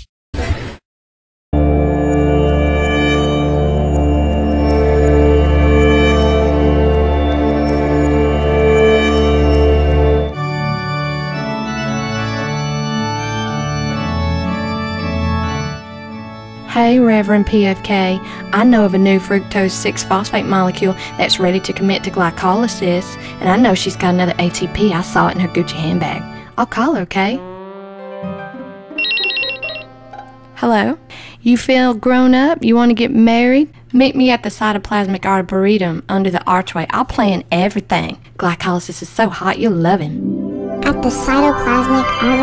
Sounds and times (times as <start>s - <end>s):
Organ: 1.6s - 16.7s, 28.2s - 30.5s.